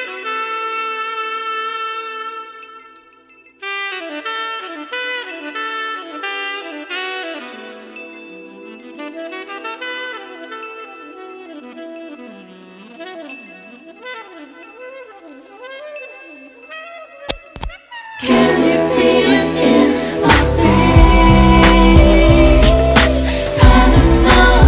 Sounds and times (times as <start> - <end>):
Music: 0.0 - 24.6.